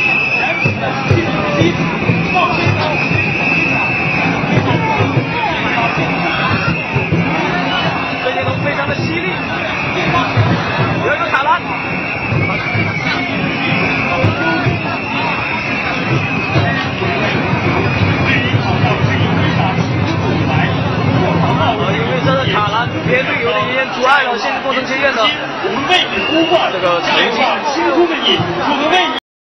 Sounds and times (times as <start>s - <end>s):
Outside, urban or manmade: 0.0s - 29.2s
Speech: 0.0s - 29.2s.